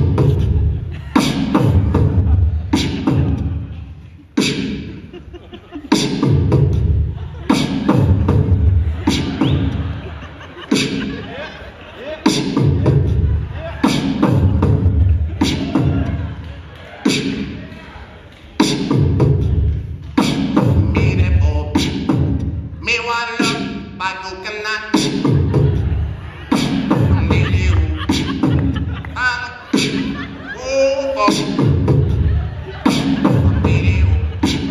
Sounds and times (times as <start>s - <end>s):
Dubstep: 0.0s - 3.7s, 4.3s - 5.1s, 5.9s - 10.0s, 12.2s - 16.2s, 24.5s - 30.2s, 30.8s - 34.7s.